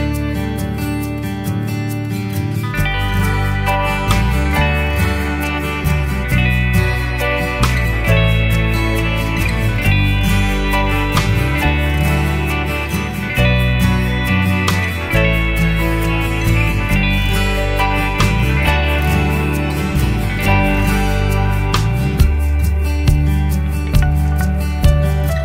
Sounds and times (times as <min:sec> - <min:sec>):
Music: 0:00.0 - 0:25.4.